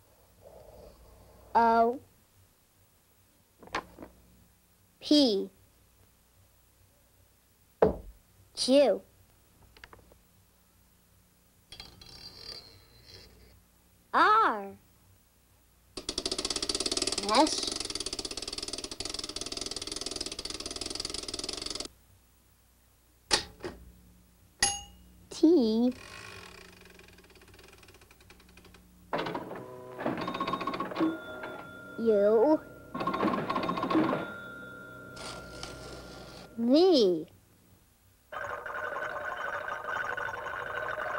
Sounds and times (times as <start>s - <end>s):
Speech: 1.6s - 2.1s, 5.0s - 5.6s, 8.6s - 9.1s, 14.2s - 14.8s, 17.2s - 17.8s, 25.3s - 26.0s, 32.0s - 32.6s, 36.6s - 37.3s.